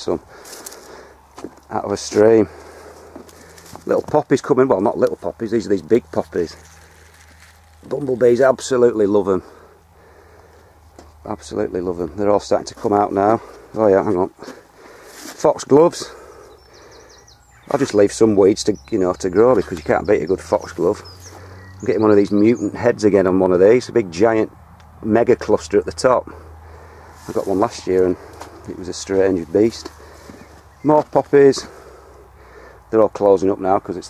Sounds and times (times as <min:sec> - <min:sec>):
Speech: 0:00.0 - 0:00.2, 0:01.7 - 0:02.6, 0:03.8 - 0:06.6, 0:07.8 - 0:09.5, 0:11.2 - 0:14.5, 0:15.3 - 0:16.2, 0:17.7 - 0:21.1, 0:21.8 - 0:26.4, 0:27.2 - 0:29.9, 0:30.8 - 0:31.8, 0:32.9 - 0:34.0
Outside, rural or natural: 0:00.0 - 0:34.0.